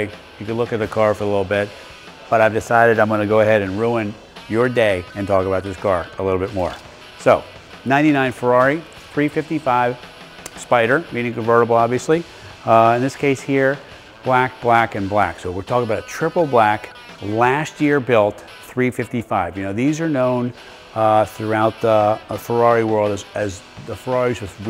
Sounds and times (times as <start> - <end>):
Speech: 0.0 - 1.7, 2.3 - 10.0, 10.6 - 24.6
Music: 0.0 - 24.6.